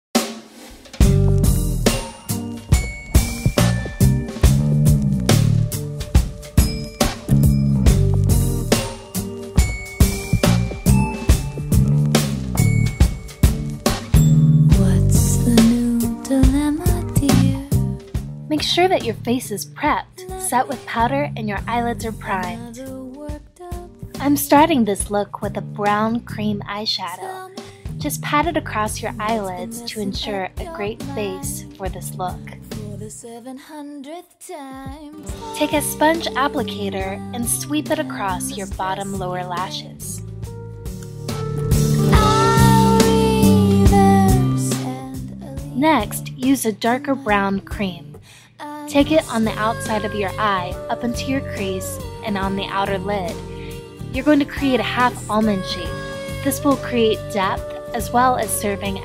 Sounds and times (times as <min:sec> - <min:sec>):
Drum: 0:00.2 - 0:18.5, 0:34.8 - 0:46.2.